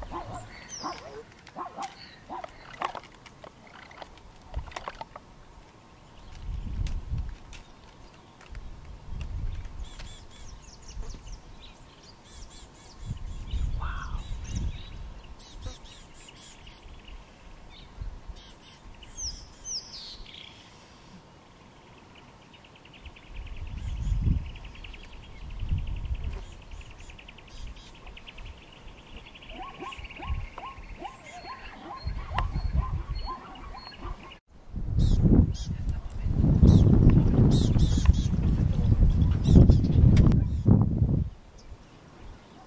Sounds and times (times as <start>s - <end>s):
Bird: 0.0s - 5.2s, 9.2s - 21.2s, 21.8s - 34.4s.